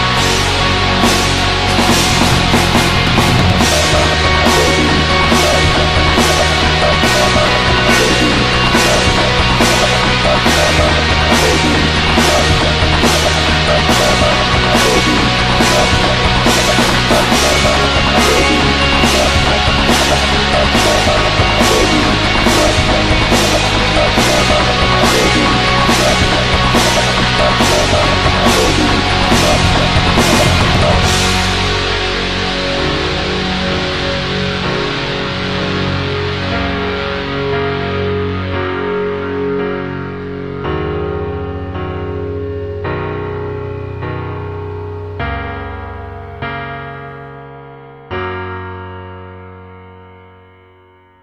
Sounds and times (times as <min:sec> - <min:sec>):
Heavy metal: 0:00.0 - 0:45.3.